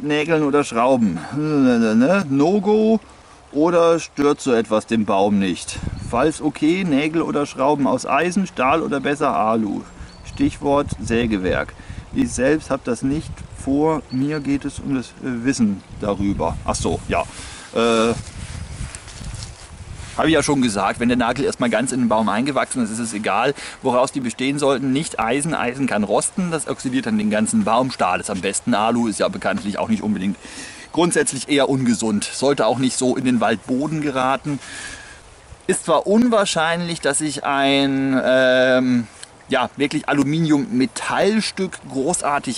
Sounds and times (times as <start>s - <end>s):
Speech: 0.0s - 18.2s, 20.2s - 34.6s, 35.7s - 42.5s
Outside, rural or natural: 0.0s - 42.5s.